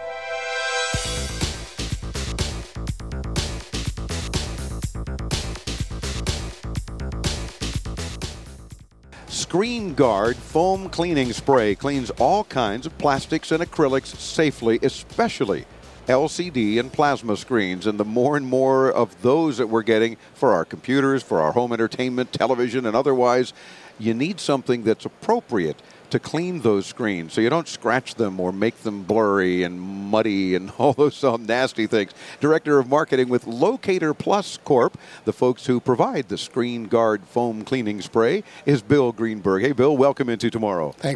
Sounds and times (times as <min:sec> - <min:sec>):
Speech: 0:09.3 - 0:41.1.